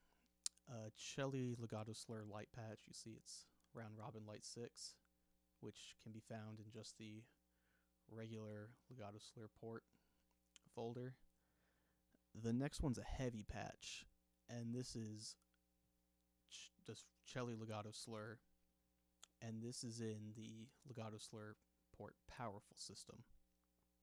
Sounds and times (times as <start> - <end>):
Speech: 0.5 - 7.4, 8.1 - 9.9, 10.6 - 11.3, 12.4 - 15.5, 16.5 - 18.4, 19.2 - 23.4.